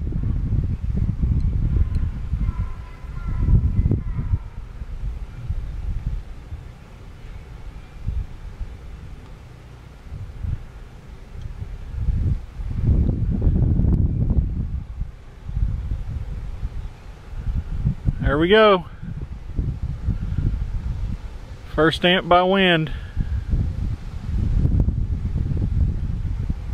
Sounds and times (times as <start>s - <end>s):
Wind: 0.0s - 26.7s
Speech: 18.2s - 18.9s, 21.7s - 23.0s.